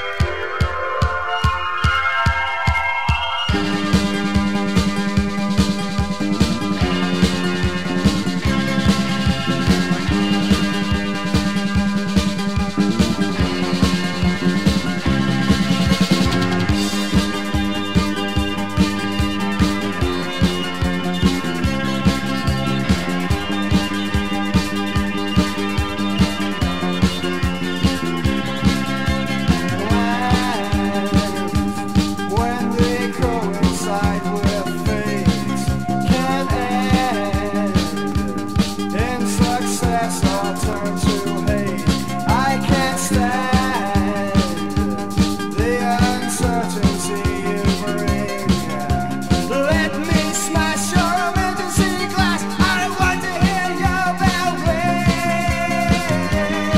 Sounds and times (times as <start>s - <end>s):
Music: 0.0s - 56.7s.